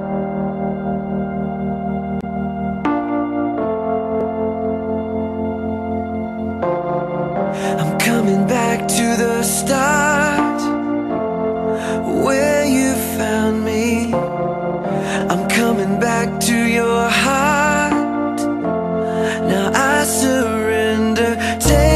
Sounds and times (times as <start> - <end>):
New-age music: 0.0 - 21.9.